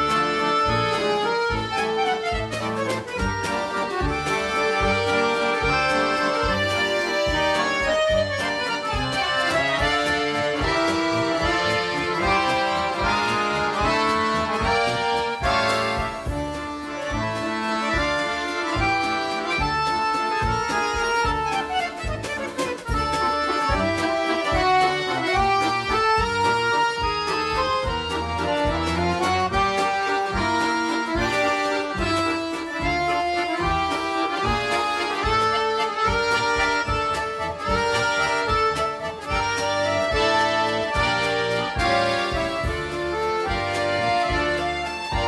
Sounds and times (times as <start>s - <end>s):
Accordion: 0.0s - 45.2s.